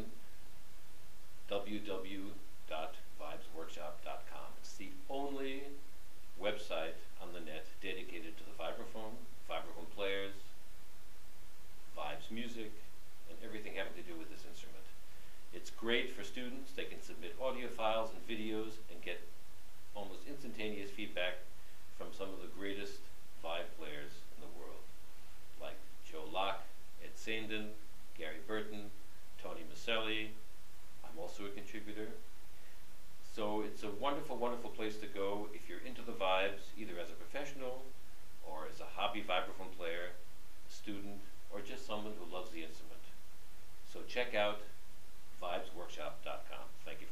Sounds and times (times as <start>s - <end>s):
Speech: 1.5s - 5.8s, 6.4s - 10.5s, 12.0s - 19.3s, 20.0s - 24.9s, 25.6s - 30.4s, 31.0s - 32.2s, 33.2s - 43.2s, 43.9s - 44.8s, 45.4s - 47.1s.